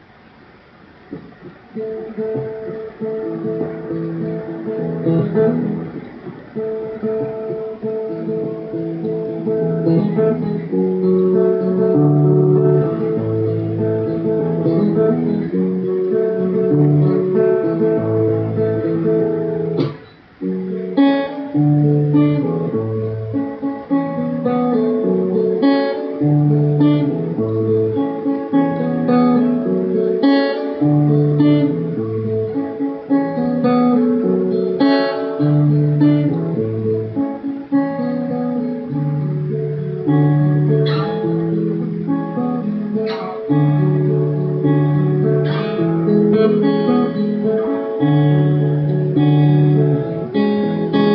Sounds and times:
Acoustic guitar: 0:00.0 - 0:51.1.

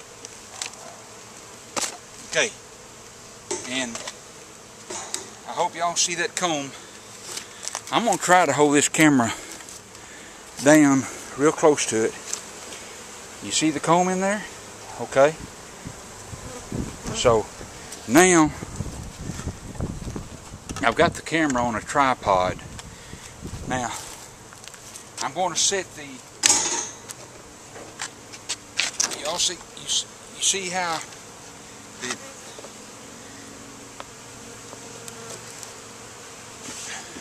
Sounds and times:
Bee, wasp, etc.: 0:00.0 - 0:37.2
Fly, housefly: 0:00.0 - 0:37.2.

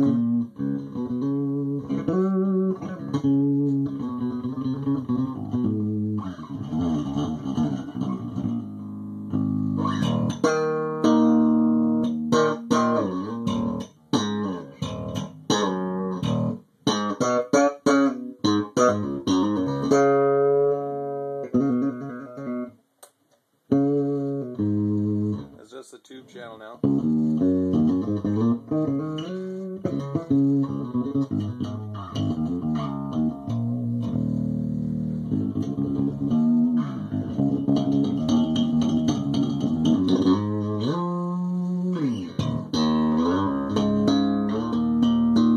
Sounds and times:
Bass guitar: 0:00.0 - 0:22.8, 0:23.7 - 0:25.7, 0:26.7 - 0:45.5
Electronic tuner: 0:00.0 - 0:25.6, 0:26.8 - 0:45.5.

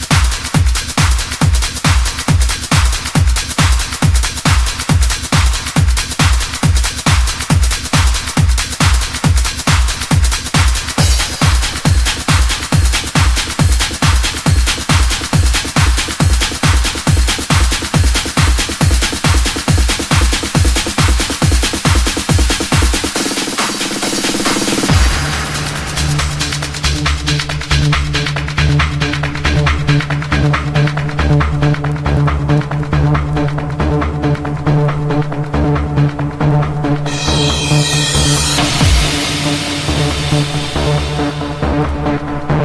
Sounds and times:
Trance music: 0:00.0 - 0:42.6.

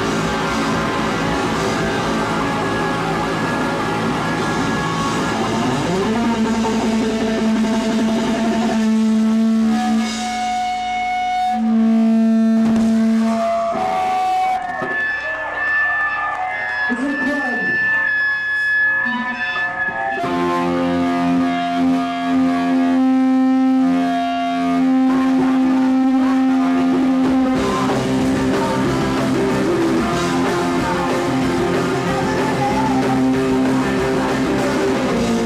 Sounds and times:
Inside, public space: 0:00.0 - 0:35.4
Theremin: 0:00.0 - 0:35.4
Speech: 0:16.9 - 0:17.8.

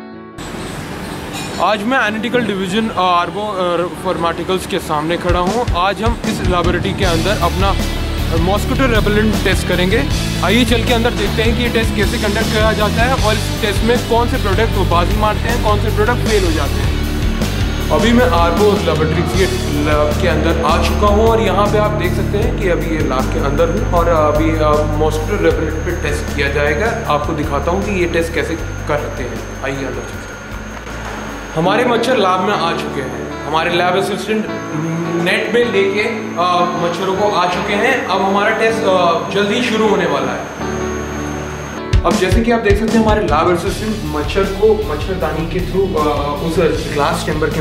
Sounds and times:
Music: 0:00.0 - 0:47.6
Speech: 0:01.6 - 0:17.0, 0:17.9 - 0:30.2, 0:31.6 - 0:40.5, 0:42.0 - 0:47.6.

